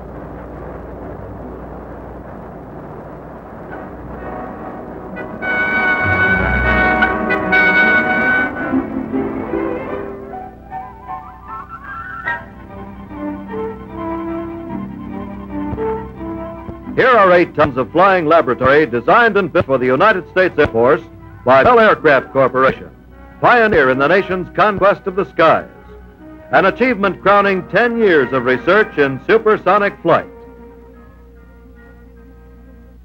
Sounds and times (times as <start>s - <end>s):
Music: 0.0s - 33.0s
Speech: 17.0s - 25.7s, 26.5s - 30.3s.